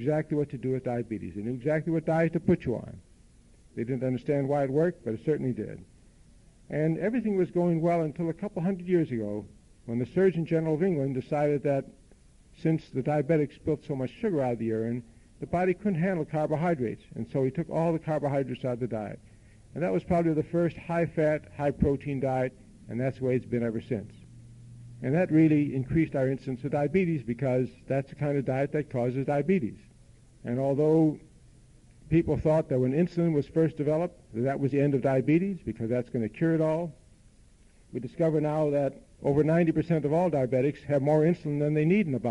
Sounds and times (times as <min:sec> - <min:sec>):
Male speech, man speaking: 0:00.0 - 0:03.0, 0:03.8 - 0:05.9, 0:06.7 - 0:12.0, 0:12.6 - 0:19.2, 0:19.8 - 0:24.2, 0:25.0 - 0:31.2, 0:32.1 - 0:37.0, 0:38.0 - 0:42.3.